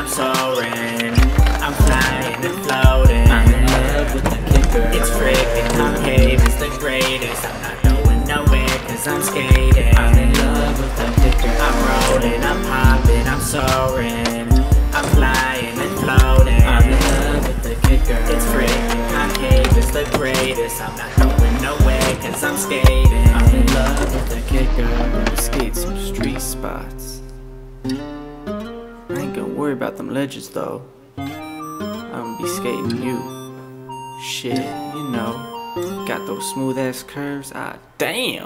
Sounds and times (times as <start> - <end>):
Music: 0.0 - 37.8
Skateboard: 0.1 - 26.4.